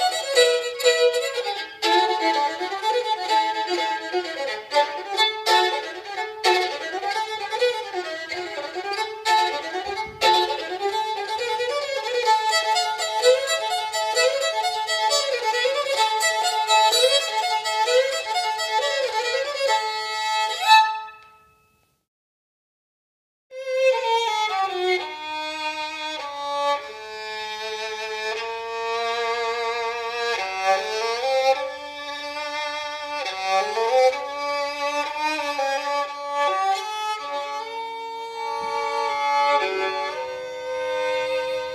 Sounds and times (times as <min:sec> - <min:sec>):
Violin, fiddle: 0:00.0 - 0:21.3, 0:23.5 - 0:41.7.